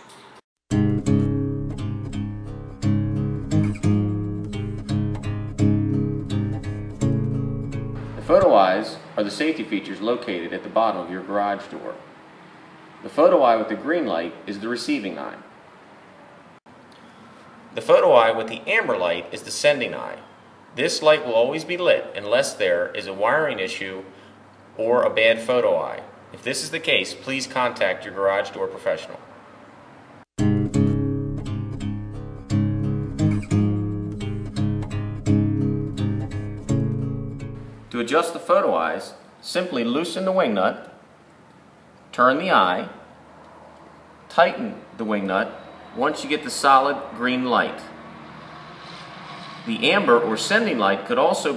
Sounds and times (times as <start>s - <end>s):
Music: 0.7s - 8.5s, 30.4s - 37.9s
Speech: 8.2s - 12.1s, 13.0s - 15.5s, 17.8s - 24.2s, 24.8s - 29.3s, 37.9s - 41.0s, 42.1s - 43.1s, 44.3s - 47.9s, 49.7s - 51.5s.